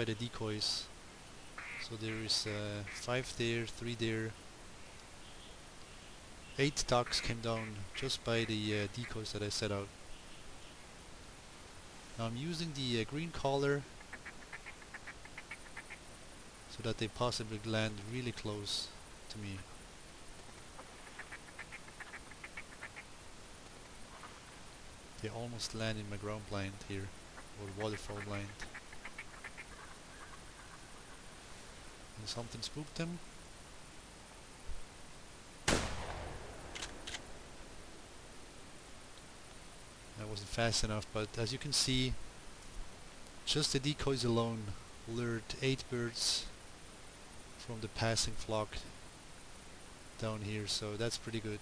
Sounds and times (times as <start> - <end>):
Speech: 0.0 - 0.9, 1.8 - 4.4, 6.6 - 9.9, 12.2 - 13.9, 16.7 - 19.7, 25.2 - 28.7, 32.2 - 33.2, 40.2 - 42.2, 43.5 - 46.5, 47.6 - 48.9, 50.2 - 51.6
Duck: 1.6 - 3.0, 14.0 - 16.0, 20.8 - 23.1, 27.4 - 30.8.